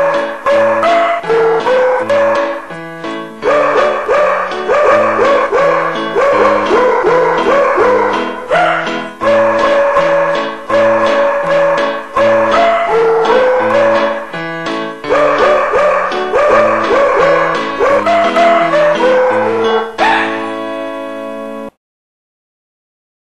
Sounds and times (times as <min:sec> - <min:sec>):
Music: 0:00.0 - 0:21.8.